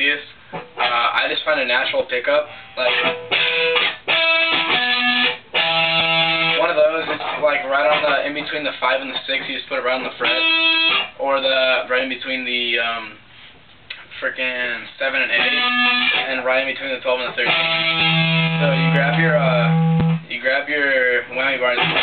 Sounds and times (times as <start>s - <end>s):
Speech: 0.0s - 3.1s, 6.6s - 10.6s, 11.2s - 13.2s, 14.1s - 17.6s, 18.6s - 22.0s
Music: 2.5s - 8.2s, 10.3s - 11.1s, 15.4s - 16.2s, 17.4s - 20.3s, 21.8s - 22.0s.